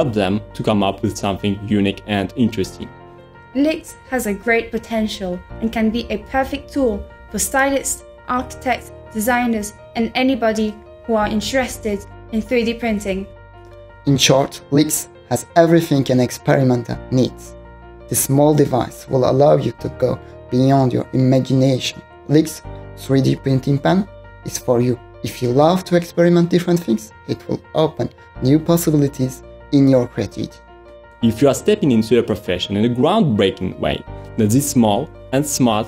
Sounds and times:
Music: 0.0 - 35.8.

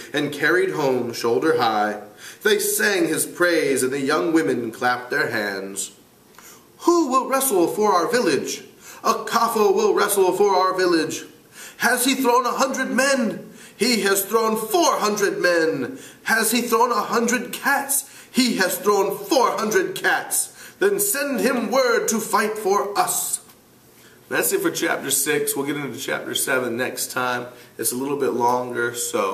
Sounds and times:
Speech: 0.0 - 6.0, 6.8 - 23.6, 24.3 - 29.3
Inside, small room: 0.0 - 29.3.

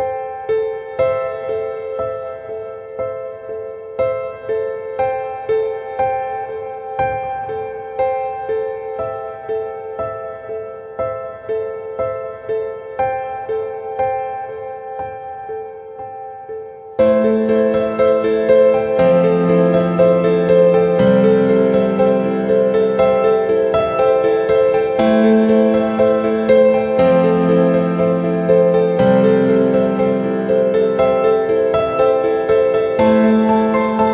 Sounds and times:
Music: 0.0 - 34.1.

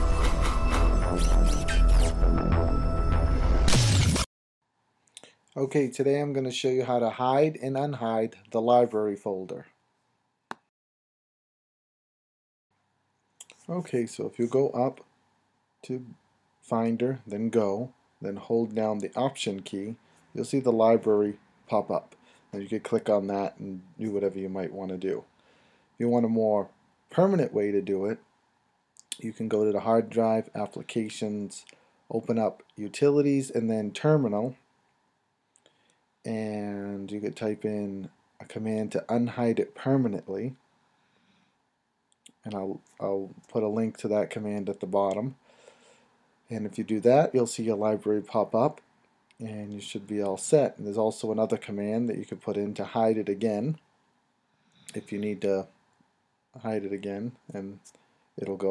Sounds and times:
Speech: 1.0 - 1.4, 5.6 - 9.7, 13.4 - 15.0, 15.8 - 25.3, 26.0 - 28.2, 29.1 - 34.6, 36.3 - 40.6, 42.3 - 45.4, 46.5 - 48.8, 49.4 - 53.8, 54.9 - 55.7, 56.6 - 58.7.

